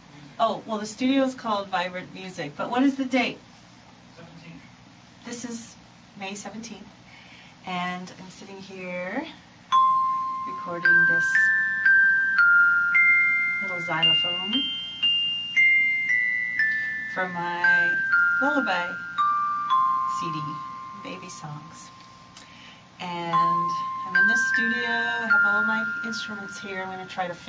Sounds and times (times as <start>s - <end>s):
Musical instrument: 9.8s - 27.2s.